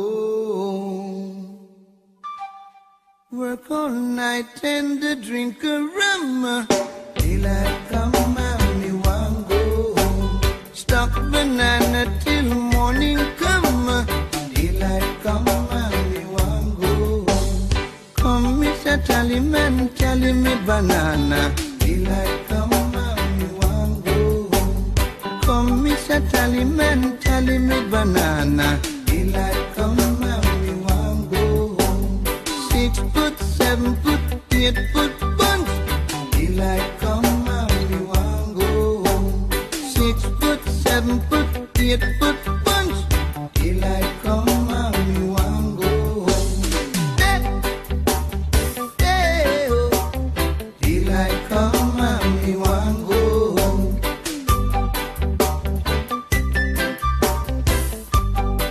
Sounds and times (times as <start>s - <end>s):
Music: 1.8s - 58.7s.